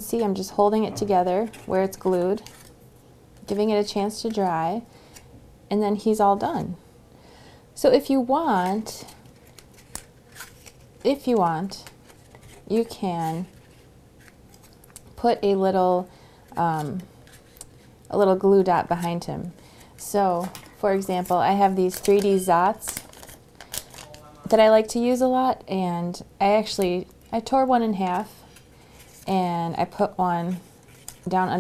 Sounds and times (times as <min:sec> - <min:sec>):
Inside, small room: 0:00.0 - 0:31.6.